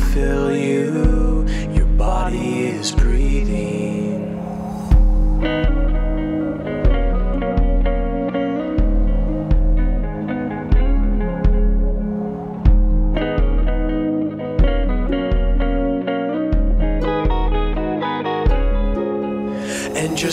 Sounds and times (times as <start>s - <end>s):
Steel guitar, slide guitar: 5.4s - 20.3s.